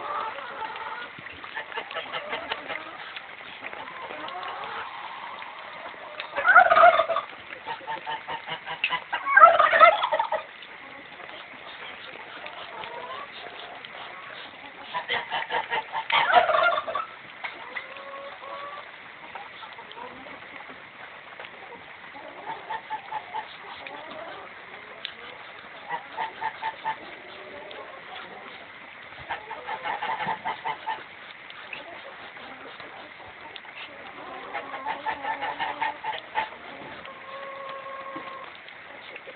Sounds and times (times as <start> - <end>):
Duck: 0.0 - 20.8, 21.5 - 39.3.